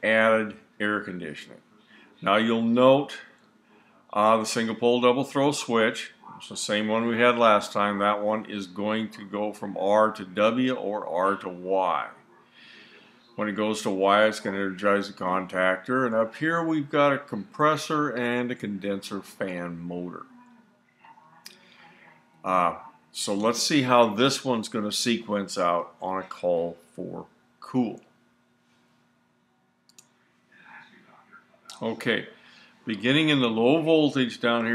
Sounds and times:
Speech: 0.0s - 3.3s, 4.1s - 28.1s, 30.6s - 34.7s.

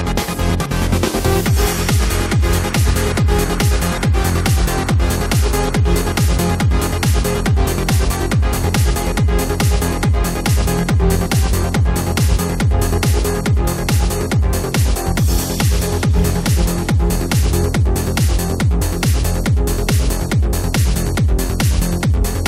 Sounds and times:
Techno: 0.0s - 22.4s.

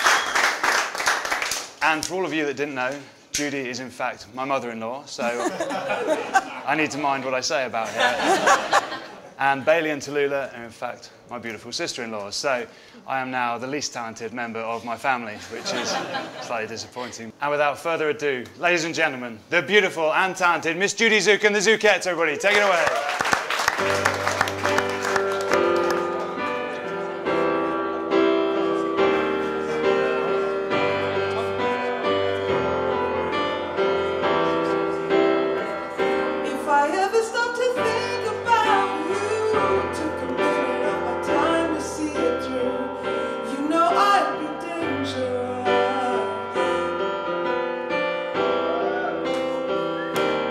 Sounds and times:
Speech: 16.4s - 22.9s
Music: 23.4s - 50.5s.

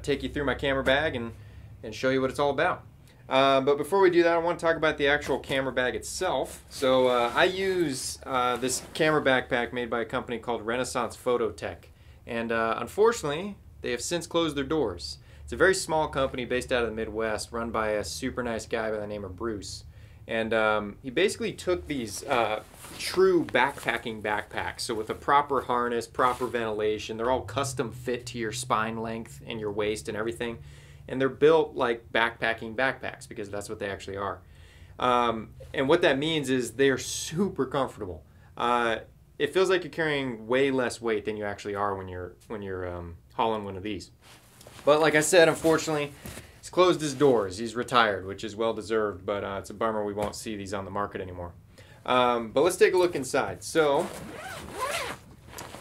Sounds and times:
Speech: 0.0s - 34.4s, 35.0s - 44.2s, 44.8s - 54.5s.

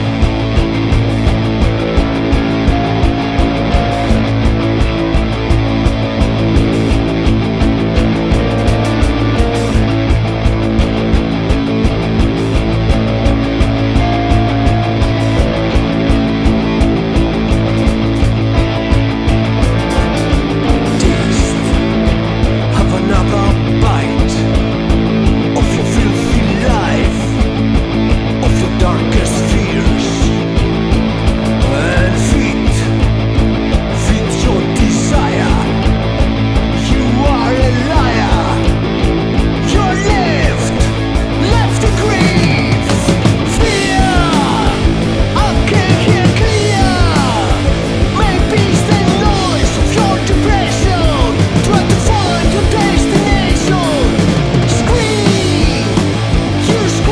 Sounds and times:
Music: 0.0s - 57.1s.

